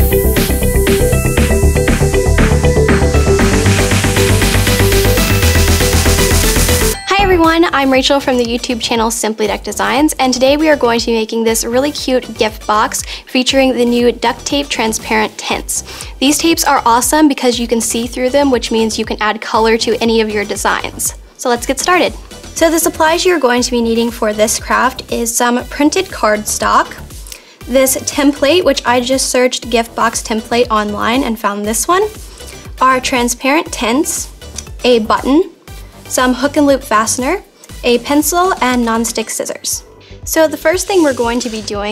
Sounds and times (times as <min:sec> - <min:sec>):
Music: 0:00.0 - 0:41.9
Speech: 0:07.1 - 0:27.0, 0:27.7 - 0:32.2, 0:32.8 - 0:35.5, 0:36.1 - 0:41.9.